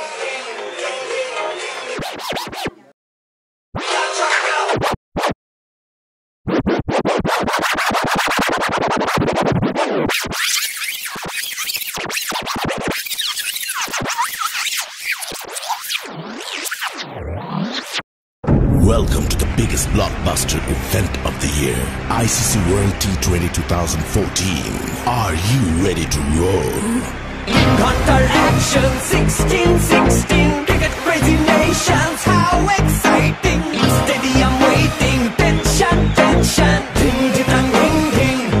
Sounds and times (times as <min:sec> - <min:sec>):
Inside, public space: 0:00.0 - 0:02.9, 0:21.5 - 0:38.6
Music: 0:00.0 - 0:02.9, 0:03.8 - 0:04.9, 0:18.6 - 0:38.6.